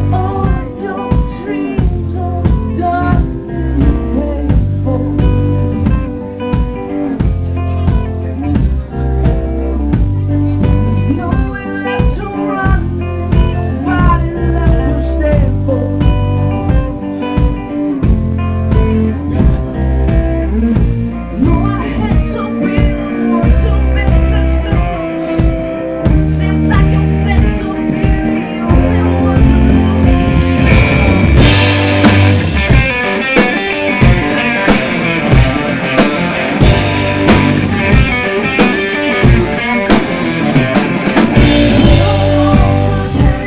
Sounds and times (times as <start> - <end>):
Music: 0.0 - 43.4.